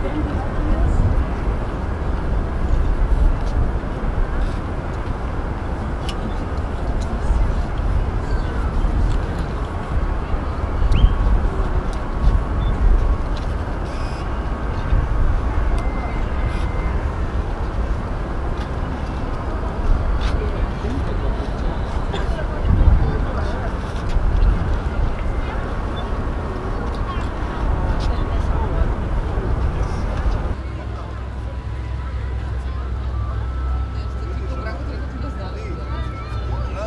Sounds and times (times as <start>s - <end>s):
Speech: 0.0s - 1.7s, 19.5s - 36.8s
Outside, urban or manmade: 0.0s - 36.8s.